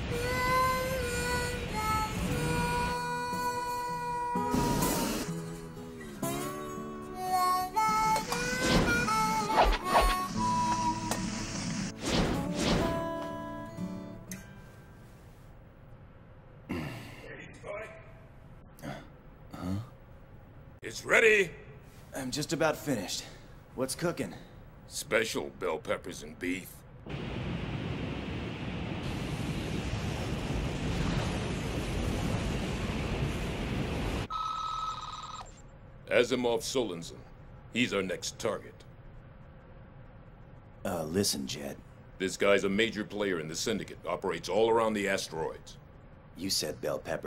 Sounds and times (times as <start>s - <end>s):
Speech: 17.2s - 18.2s, 20.8s - 26.8s, 36.1s - 38.9s, 40.8s - 45.8s, 46.4s - 47.2s.